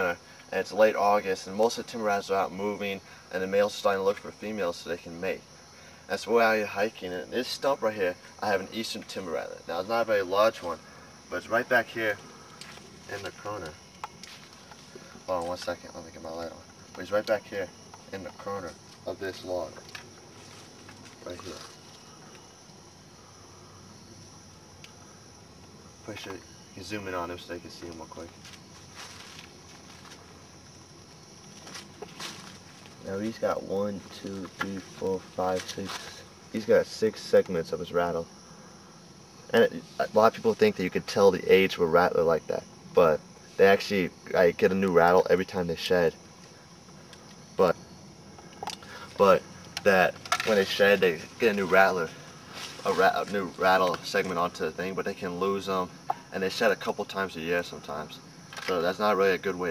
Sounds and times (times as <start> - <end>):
Speech: 0.0 - 5.4, 6.1 - 12.2, 13.1 - 13.8, 15.3 - 19.8, 21.2 - 21.7, 26.0 - 28.3, 33.0 - 38.3, 39.5 - 46.2, 47.6 - 47.8, 49.2 - 52.2, 52.8 - 59.7
Outside, rural or natural: 0.0 - 59.7.